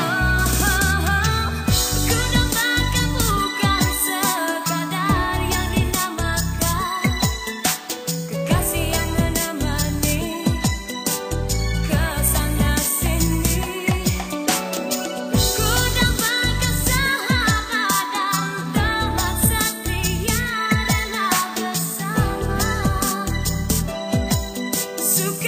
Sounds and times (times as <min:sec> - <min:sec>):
Singing: 0:00.0 - 0:07.8
Music: 0:00.0 - 0:25.4.